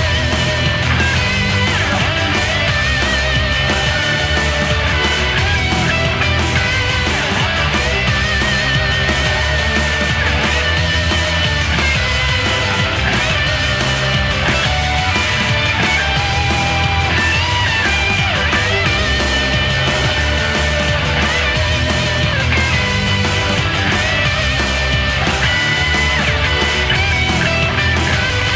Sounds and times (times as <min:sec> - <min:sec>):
Music: 0:00.0 - 0:28.5.